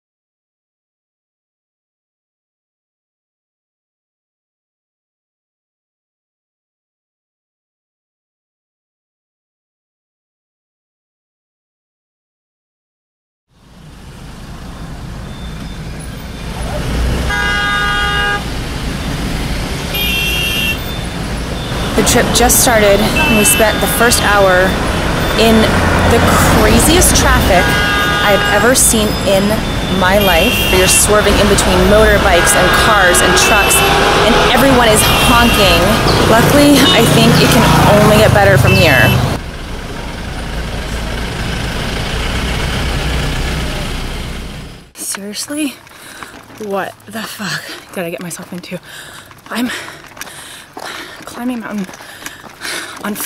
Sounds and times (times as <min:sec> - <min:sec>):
Car: 0:13.5 - 0:53.2
Speech: 0:22.0 - 0:24.8, 0:25.4 - 0:39.4, 0:45.0 - 0:45.8, 0:46.6 - 0:48.8, 0:49.5 - 0:49.8, 0:51.3 - 0:51.9, 0:53.0 - 0:53.2.